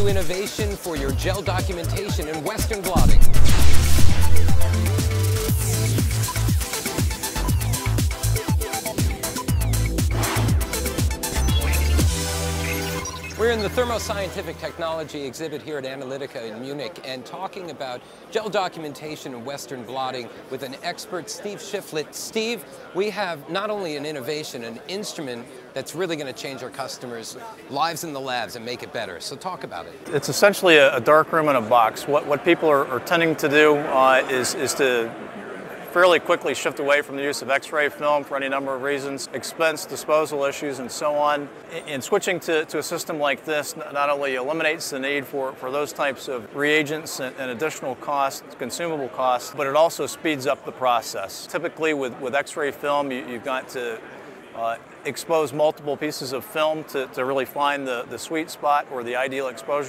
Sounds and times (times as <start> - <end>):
Speech: 0.0 - 3.2, 13.4 - 35.2, 35.9 - 59.8.